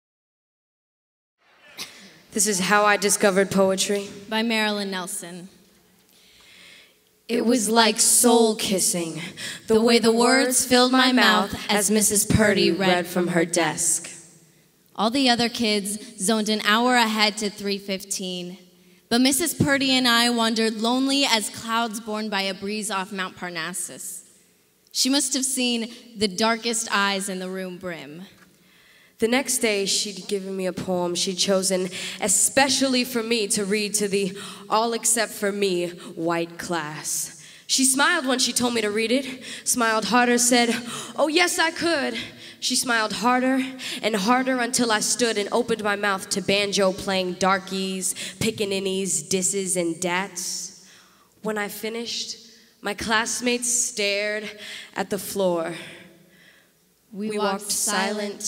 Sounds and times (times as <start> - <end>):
Inside, large room or hall: 1.4 - 58.4
Speech: 2.3 - 5.6, 7.3 - 14.2, 15.0 - 24.2, 24.9 - 28.3, 57.1 - 58.4.